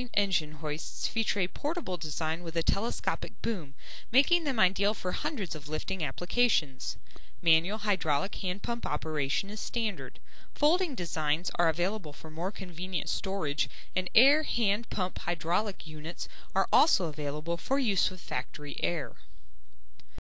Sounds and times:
Speech: 0.0 - 19.2.

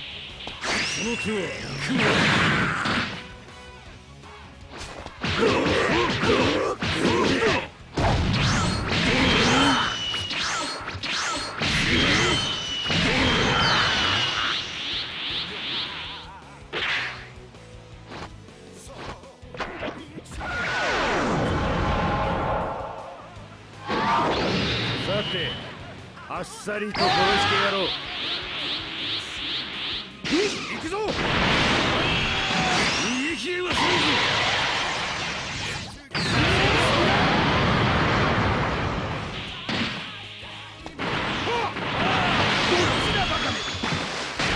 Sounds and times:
Music: 0.0 - 44.5.

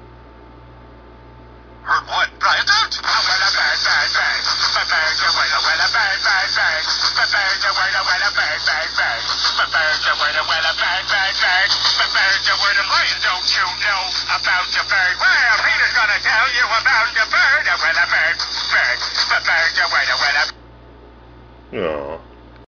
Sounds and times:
Speech: 1.9 - 20.5, 21.7 - 22.3
Music: 3.0 - 20.5.

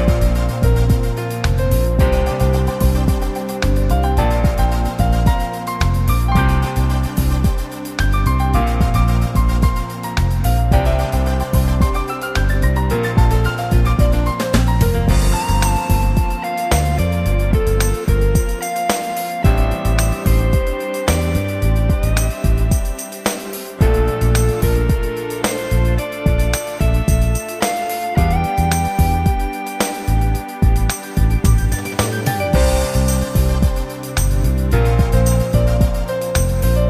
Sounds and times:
Music: 0.0 - 36.8.

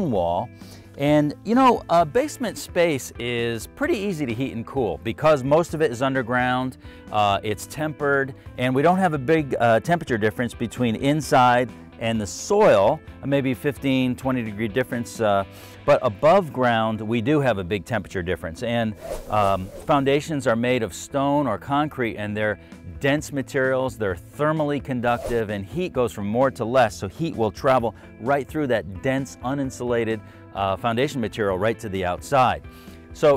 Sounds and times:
Speech: 0.0 - 32.6, 33.2 - 33.3
Music: 0.0 - 33.3.

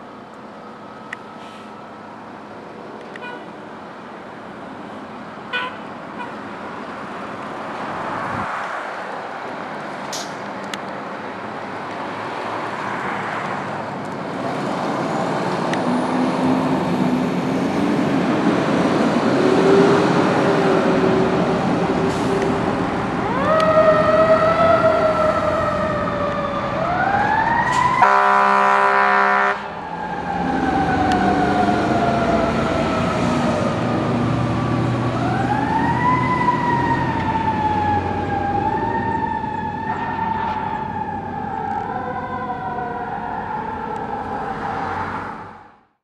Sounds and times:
Heavy engine (low frequency): 0.0 - 8.4, 9.7 - 44.0
Vehicle: 0.0 - 46.0.

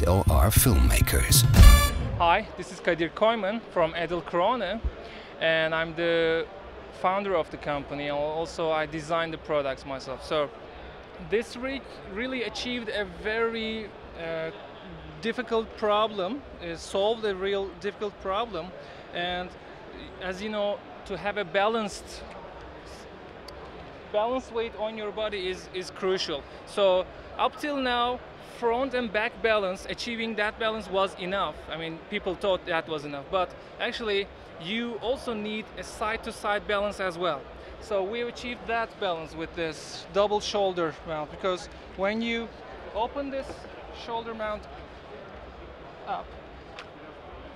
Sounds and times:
Speech: 0.0 - 1.6, 11.2 - 14.6, 15.2 - 22.3, 24.2 - 44.7.

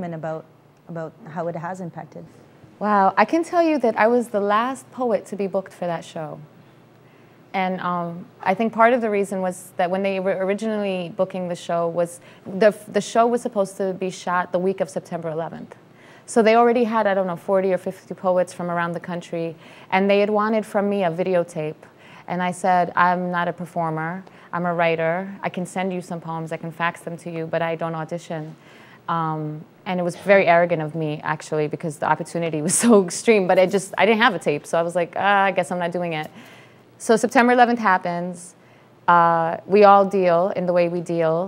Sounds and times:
Female speech, woman speaking: 0.0 - 6.5, 7.6 - 36.3, 37.0 - 38.5, 39.1 - 41.4.

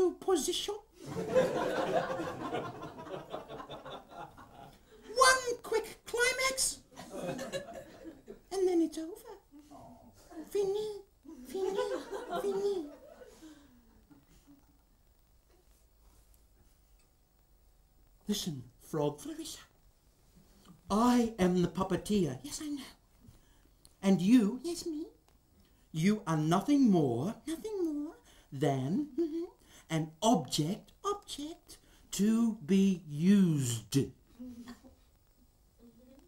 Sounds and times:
Speech: 0.0 - 0.9, 5.1 - 6.9, 8.5 - 13.1, 18.2 - 19.7, 20.9 - 23.0, 24.0 - 25.2, 26.0 - 34.2.

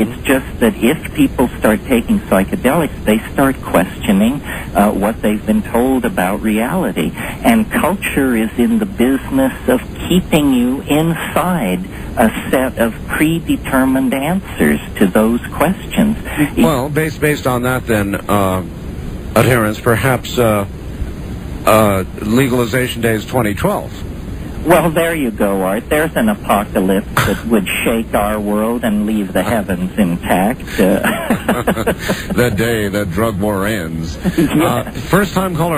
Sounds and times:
Speech: 0.0 - 18.7, 19.4 - 20.7, 21.7 - 24.0, 24.6 - 35.7.

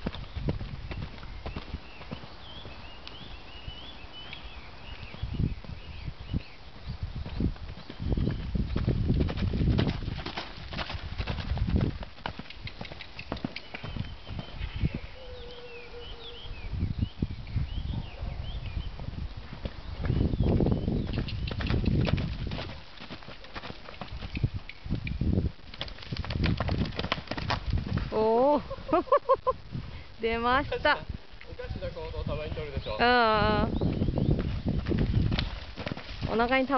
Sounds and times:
Run: 7.2 - 14.6, 19.1 - 25.1, 25.7 - 28.2, 33.9 - 36.3.

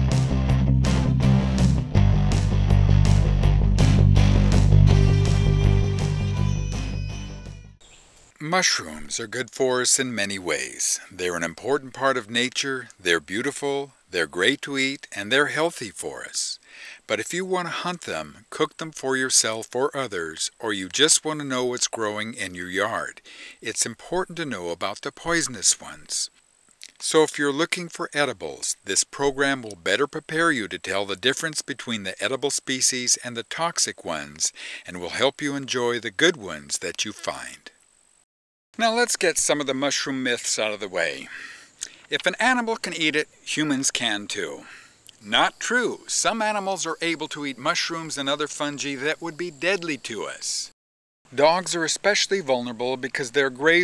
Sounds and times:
Music: 0.0 - 7.8
Narration, monologue: 7.8 - 53.8.

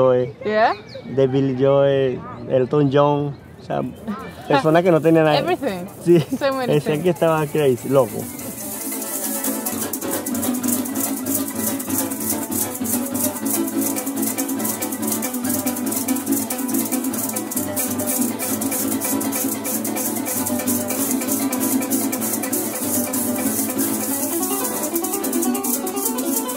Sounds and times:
Bowed string instrument: 3.7 - 26.5
Rattle (instrument): 4.2 - 26.5
Harp: 6.7 - 26.5.

